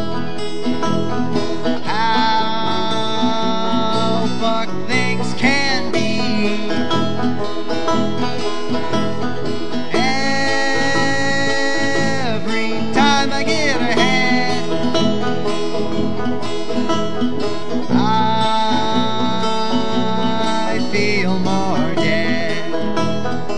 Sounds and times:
Bluegrass: 0.0 - 23.5.

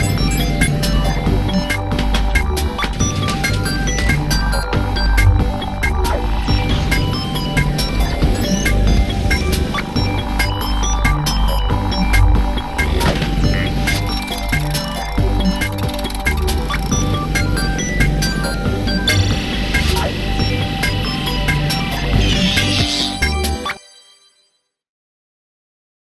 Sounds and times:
Music: 0.0 - 24.8.

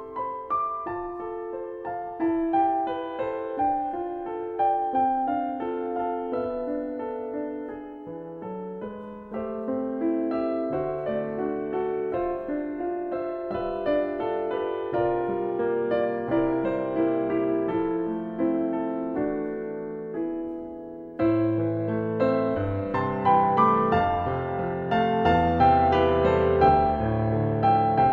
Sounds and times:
Keyboard (musical): 0.0 - 28.1.

